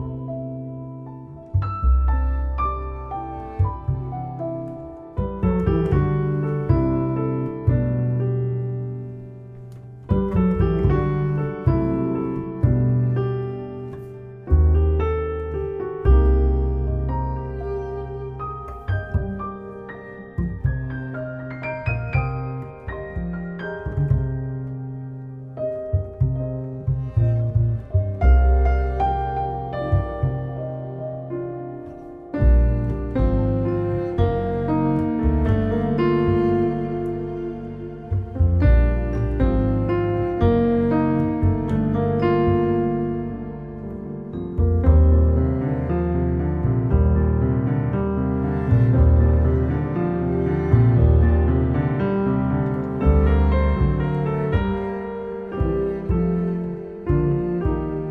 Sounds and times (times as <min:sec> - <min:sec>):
Music: 0:00.0 - 0:58.1.